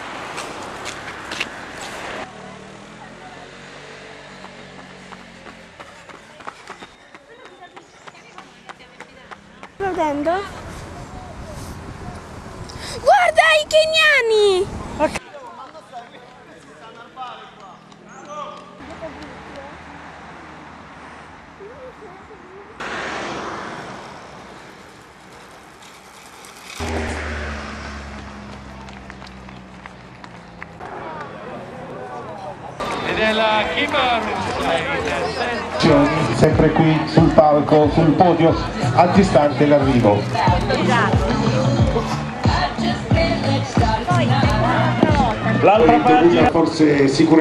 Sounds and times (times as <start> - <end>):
Outside, urban or manmade: 0.0 - 47.4
Run: 4.3 - 10.9, 15.2 - 19.7, 28.2 - 46.6.